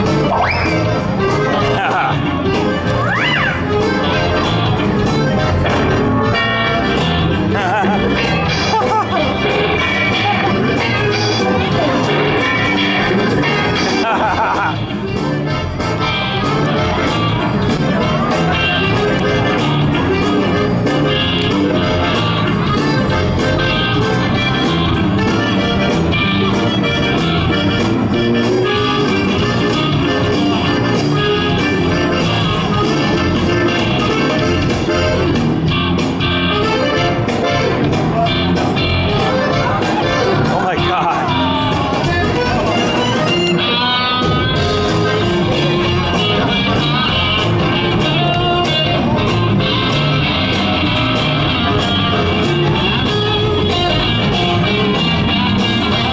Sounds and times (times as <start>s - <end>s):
Music: 0.0s - 56.1s.